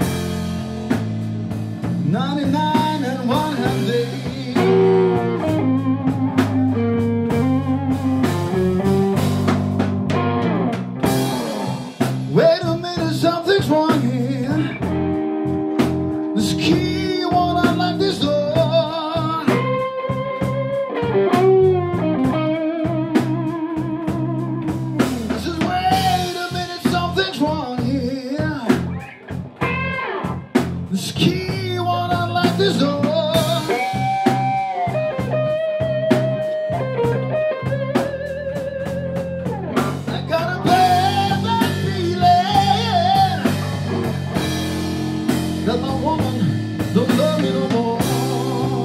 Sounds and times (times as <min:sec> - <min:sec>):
Rock and roll: 0:00.0 - 0:48.8.